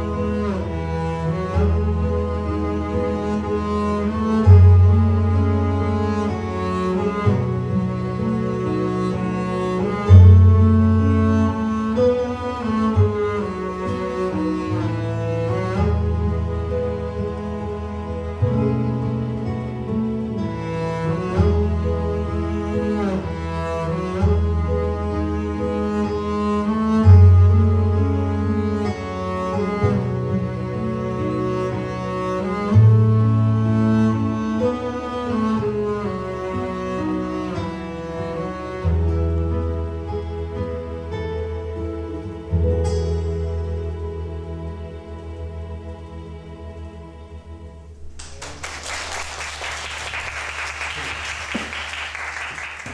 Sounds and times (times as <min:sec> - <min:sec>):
Double bass: 0:00.0 - 0:48.6
Cello: 0:00.0 - 0:52.9.